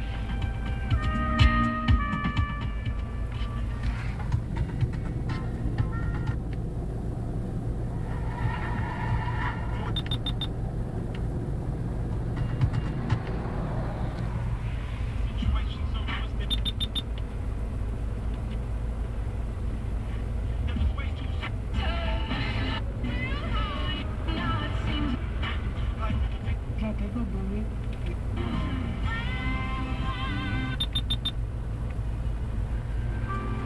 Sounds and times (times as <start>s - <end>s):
Music: 0.0s - 6.4s, 21.8s - 26.4s, 28.4s - 30.8s, 33.2s - 33.6s
Car: 0.0s - 33.6s.